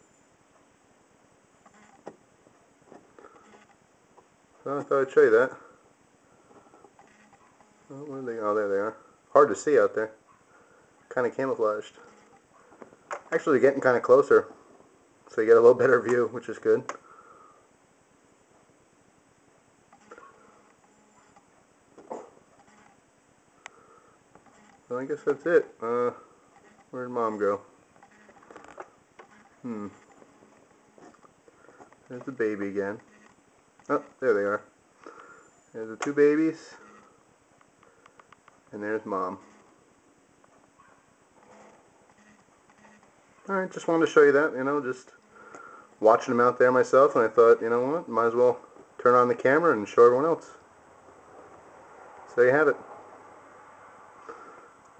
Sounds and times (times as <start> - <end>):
Speech: 4.6 - 5.7, 7.9 - 10.2, 11.1 - 12.1, 13.3 - 14.5, 15.3 - 16.9, 24.9 - 26.2, 26.9 - 27.7, 32.1 - 33.0, 33.9 - 34.7, 35.8 - 36.9, 38.7 - 39.4, 43.5 - 45.2, 46.0 - 50.6, 52.3 - 52.8.